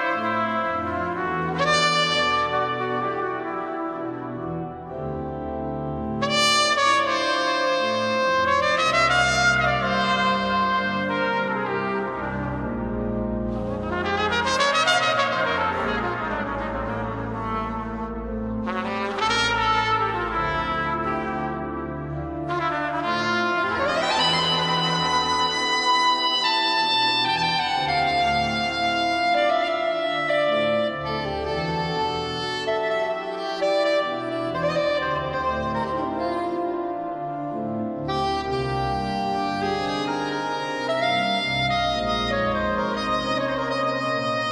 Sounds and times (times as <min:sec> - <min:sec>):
Saxophone: 0:00.0 - 0:44.5.